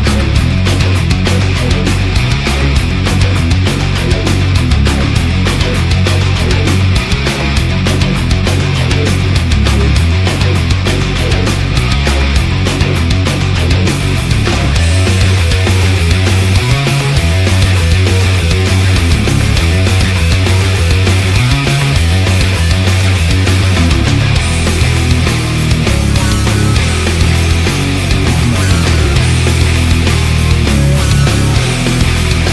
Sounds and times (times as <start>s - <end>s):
Music: 0.0s - 32.5s.